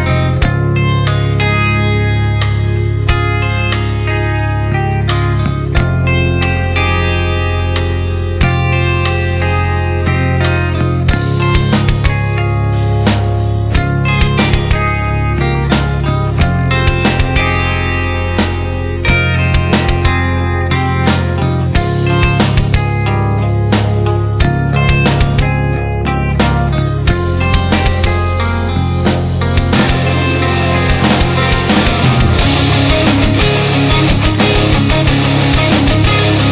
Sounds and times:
Music: 0:00.0 - 0:36.5.

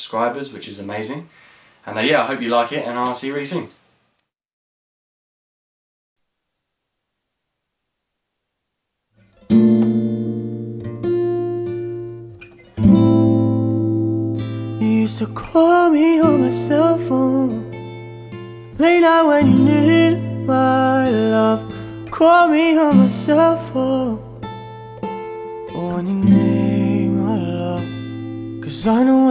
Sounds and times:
Acoustic guitar: 0:09.1 - 0:29.3.

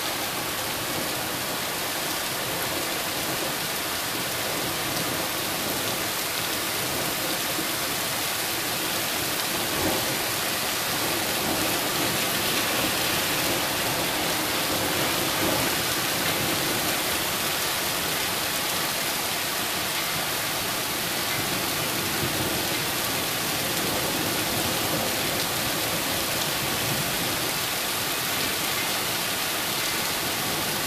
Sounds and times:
Rain: 0:00.0 - 0:30.8.

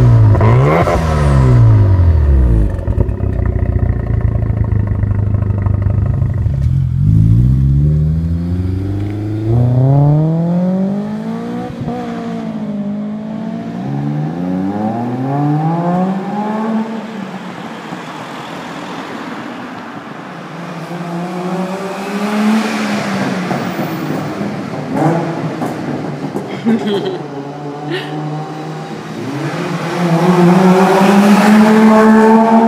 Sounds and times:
Accelerating, revving, vroom: 0:00.0 - 0:02.7, 0:07.0 - 0:17.0, 0:21.0 - 0:23.2, 0:27.6 - 0:32.6
Car: 0:00.0 - 0:32.6
Clatter: 0:02.6 - 0:07.4.

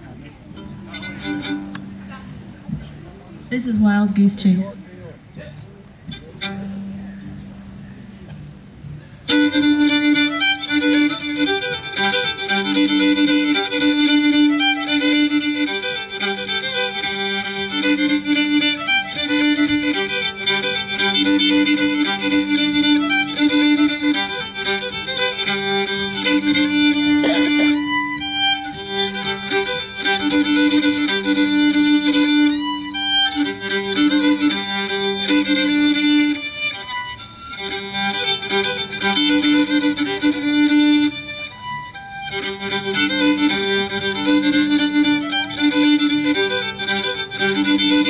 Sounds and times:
Violin, fiddle: 0:00.0 - 0:48.0.

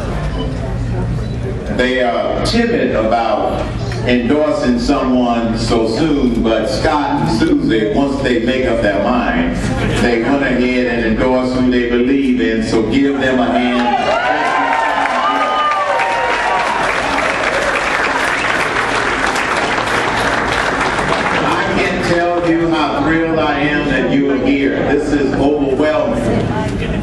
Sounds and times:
Male speech, man speaking: 0:01.7 - 0:15.4, 0:21.4 - 0:26.4.

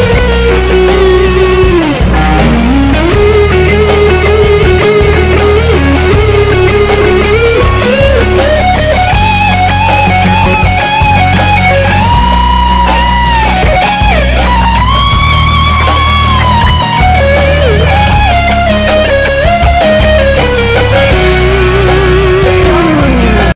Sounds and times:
Electric guitar: 0:00.0 - 0:23.5
Strum: 0:00.0 - 0:23.5.

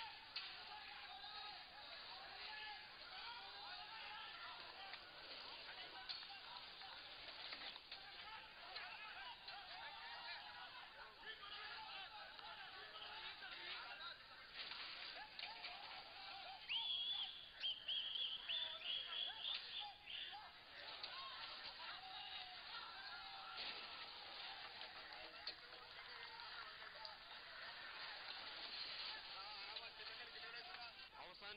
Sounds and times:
Speech: 0:00.0 - 0:17.3, 0:18.1 - 0:31.5.

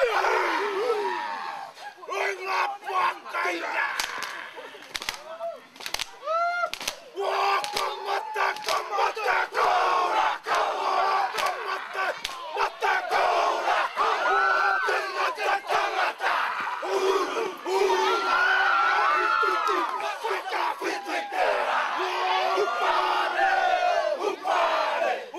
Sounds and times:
Speech: 0:00.0 - 0:06.4.

